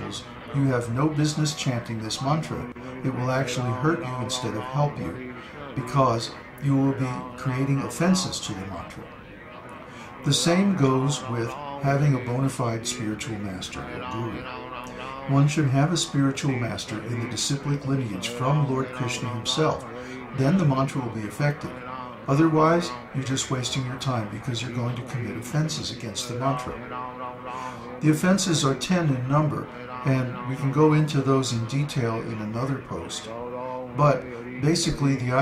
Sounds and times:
Chant: 0:00.0 - 0:35.4
Speech: 0:00.0 - 0:35.4.

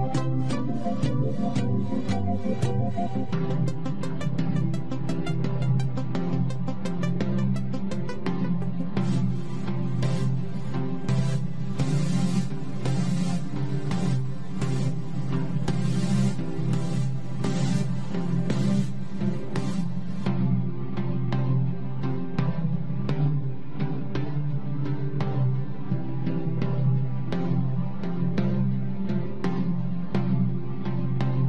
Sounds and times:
Music: 0:00.0 - 0:31.4.

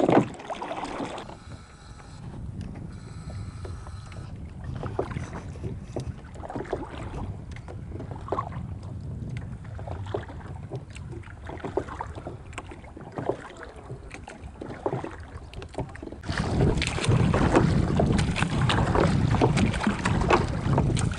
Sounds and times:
Rowboat, canoe, kayak: 0:00.0 - 0:21.1
Wind noise (microphone): 0:02.2 - 0:21.1.

